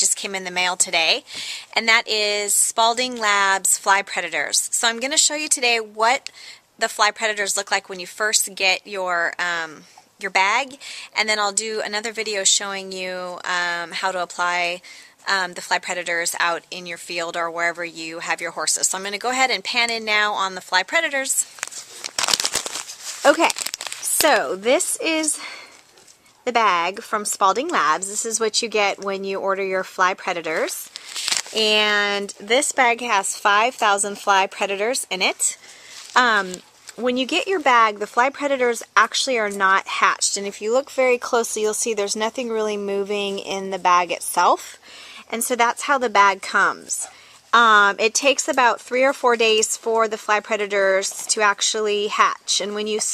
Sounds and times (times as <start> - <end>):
Speech: 0.0 - 21.5, 23.2 - 25.7, 26.5 - 30.9, 31.6 - 35.6, 36.2 - 53.1.